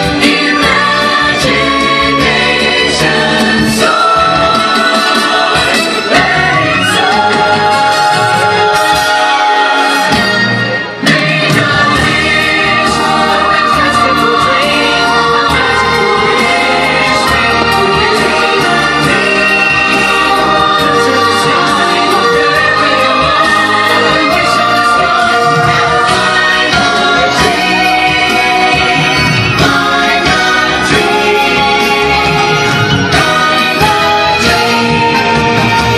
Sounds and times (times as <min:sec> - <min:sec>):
Music: 0:00.0 - 0:35.9.